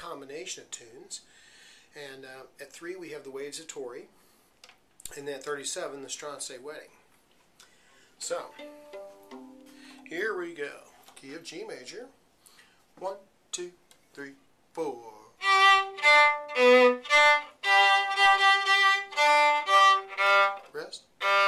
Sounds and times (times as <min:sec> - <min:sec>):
Speech: 0:00.0 - 0:01.3, 0:02.0 - 0:04.2, 0:05.1 - 0:07.0, 0:08.2 - 0:08.6, 0:10.1 - 0:12.2, 0:13.0 - 0:15.4, 0:20.7 - 0:21.1
Musical instrument: 0:08.5 - 0:10.1.